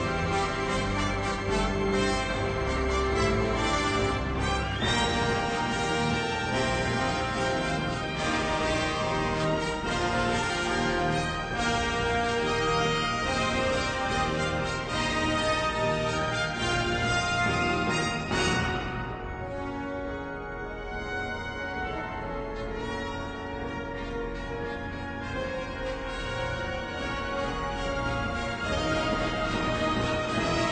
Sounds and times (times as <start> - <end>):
Music: 0.0 - 30.7.